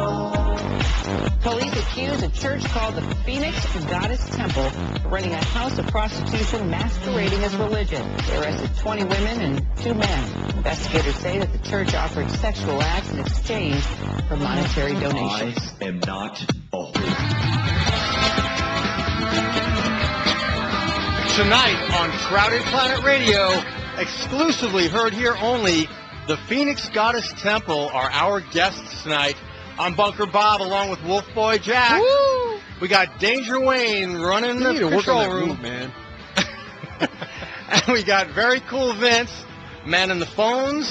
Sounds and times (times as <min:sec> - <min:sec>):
Music: 0:00.0 - 0:40.9
Speech: 0:01.4 - 0:17.1, 0:32.8 - 0:35.9.